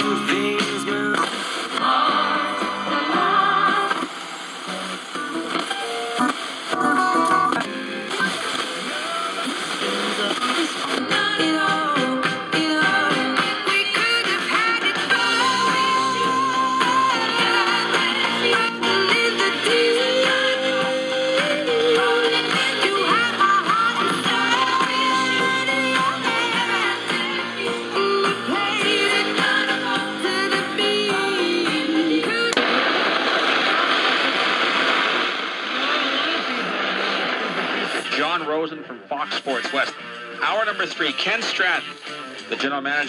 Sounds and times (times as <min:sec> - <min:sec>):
Radio: 0:00.0 - 0:12.1, 0:32.5 - 0:43.0
Music: 0:00.0 - 0:32.8, 0:37.0 - 0:43.0.